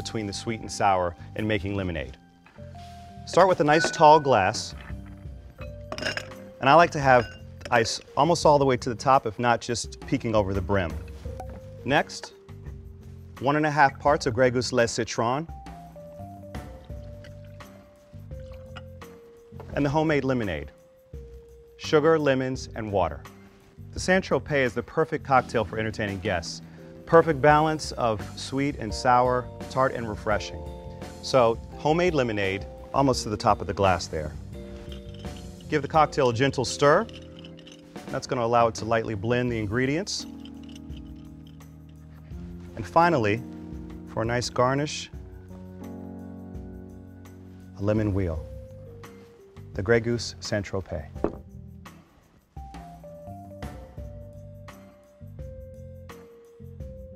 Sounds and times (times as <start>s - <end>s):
Speech: 0.0s - 2.2s, 3.3s - 4.8s, 6.6s - 11.0s, 11.8s - 12.3s, 13.4s - 15.5s, 19.8s - 20.7s, 21.8s - 23.3s, 24.0s - 30.6s, 31.2s - 34.4s, 35.7s - 37.1s, 38.1s - 40.3s, 42.8s - 43.4s, 44.2s - 45.2s, 47.8s - 48.5s, 49.8s - 51.2s
Music: 0.0s - 57.1s.